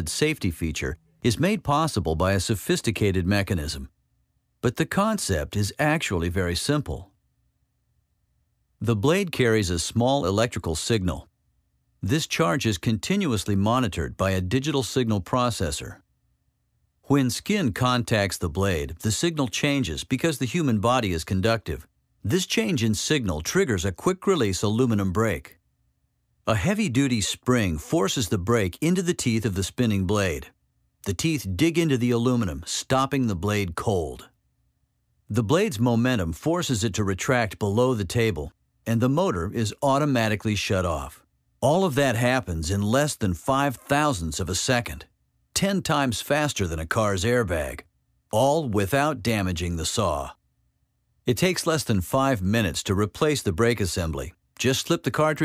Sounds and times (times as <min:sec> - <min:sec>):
Speech: 0:00.0 - 0:03.9, 0:04.6 - 0:07.1, 0:08.8 - 0:11.3, 0:12.0 - 0:16.0, 0:17.1 - 0:25.6, 0:26.5 - 0:30.5, 0:31.1 - 0:34.3, 0:35.3 - 0:50.4, 0:51.3 - 0:55.4.